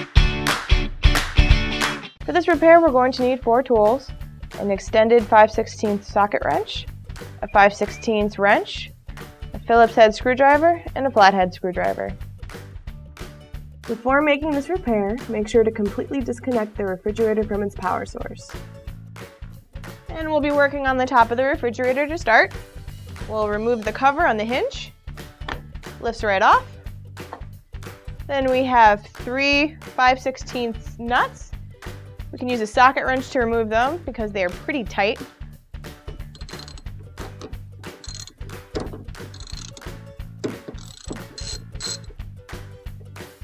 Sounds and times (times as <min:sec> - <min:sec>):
Music: 0:00.0 - 0:43.4
Speech: 0:02.3 - 0:08.9, 0:09.6 - 0:12.2, 0:13.9 - 0:18.5, 0:20.1 - 0:22.5, 0:23.3 - 0:24.9, 0:26.0 - 0:26.7, 0:28.3 - 0:31.5, 0:32.4 - 0:35.3.